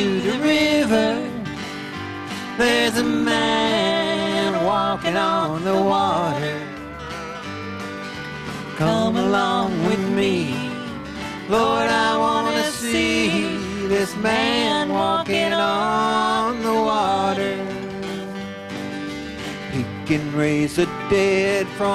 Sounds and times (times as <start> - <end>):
Gospel music: 0.0 - 21.9.